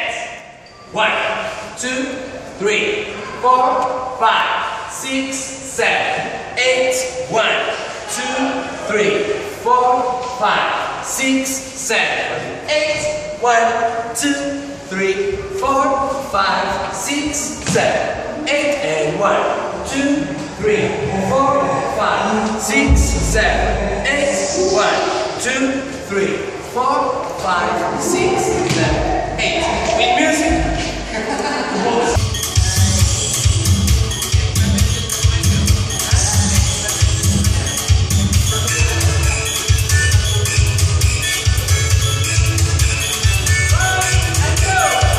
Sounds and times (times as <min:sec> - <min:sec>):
Inside, large room or hall: 0:00.0 - 0:45.1
Speech: 0:01.0 - 0:31.1, 0:43.7 - 0:45.1
Music: 0:32.1 - 0:45.1.